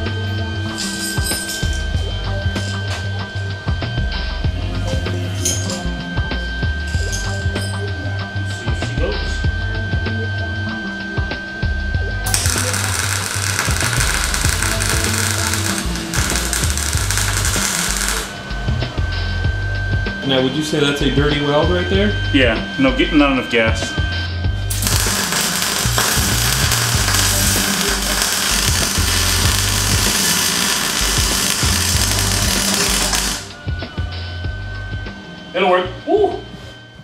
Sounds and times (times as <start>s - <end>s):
Music: 0.0s - 37.0s
Speech: 8.7s - 9.4s, 20.2s - 24.0s, 35.6s - 36.5s.